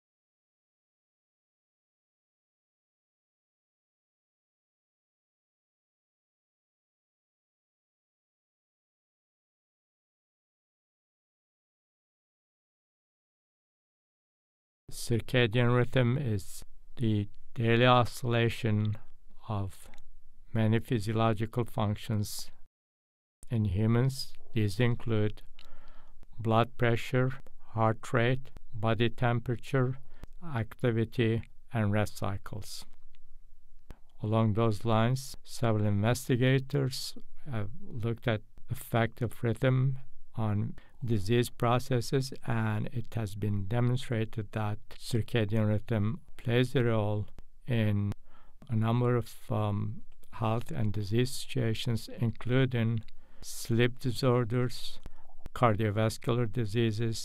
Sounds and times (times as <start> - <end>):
Speech: 14.9 - 22.7, 23.4 - 25.5, 26.3 - 33.0, 34.2 - 57.2.